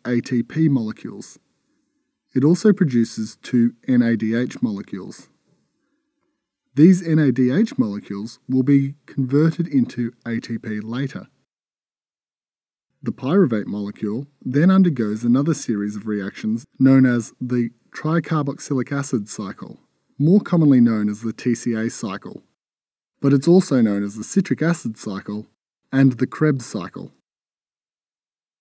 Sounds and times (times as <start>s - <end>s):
Narration, monologue: 0.0s - 11.5s, 12.8s - 27.3s.